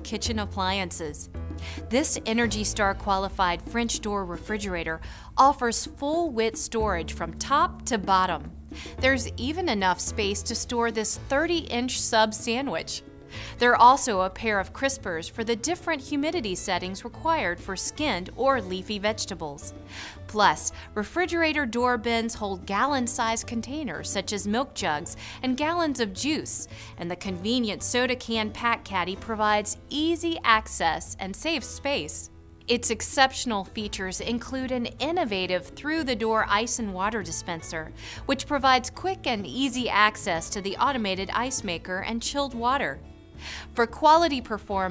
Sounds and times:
Speech: 0.0s - 1.3s, 1.9s - 19.7s, 20.3s - 43.0s, 43.8s - 44.9s
Music: 0.0s - 44.9s.

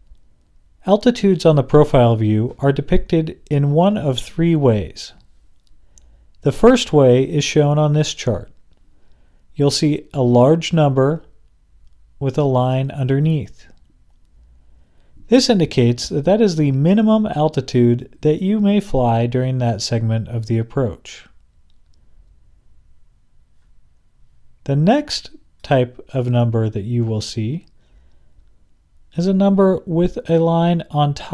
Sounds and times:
Speech: 0.8s - 5.2s, 6.4s - 8.6s, 9.6s - 11.4s, 12.2s - 13.8s, 15.3s - 21.4s, 24.6s - 27.7s, 29.1s - 31.3s.

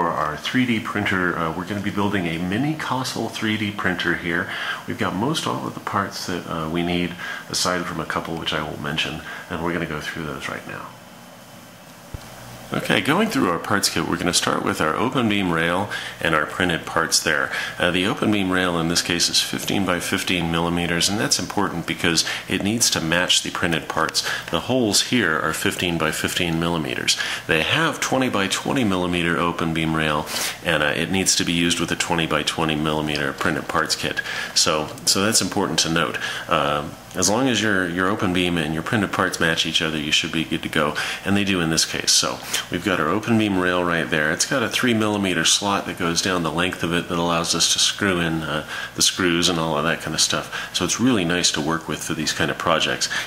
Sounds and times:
Speech: 0.0s - 11.0s, 12.7s - 53.2s.

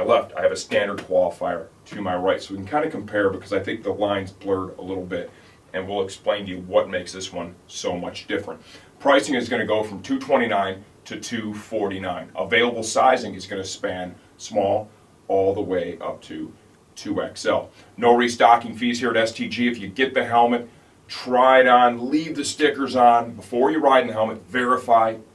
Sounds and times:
Speech: 0.0s - 25.3s.

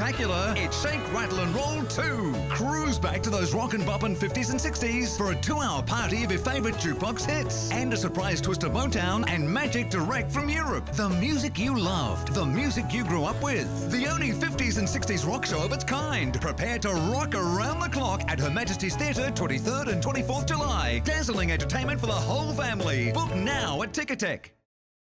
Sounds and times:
Speech: 0.0s - 24.6s
Music: 0.0s - 24.7s.

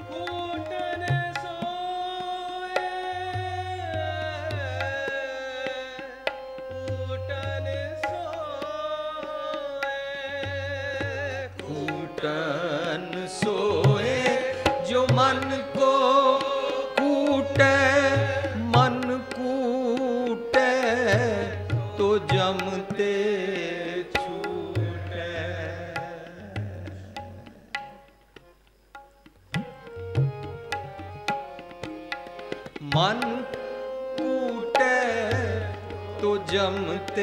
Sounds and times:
Tabla: 0.0s - 37.2s.

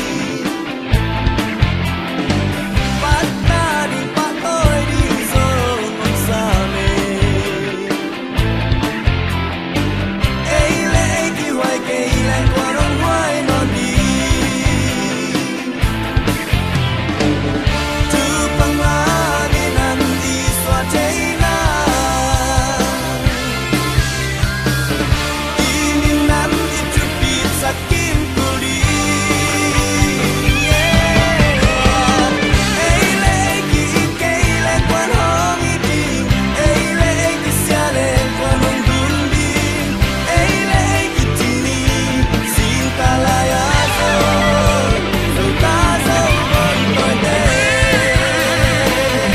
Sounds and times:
Rock music: 0.0s - 49.3s.

